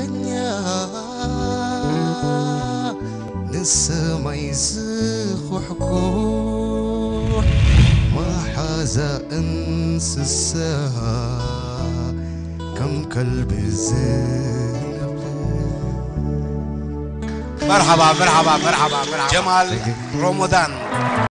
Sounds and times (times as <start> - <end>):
Music: 0.0 - 21.3
Speech: 17.6 - 21.0.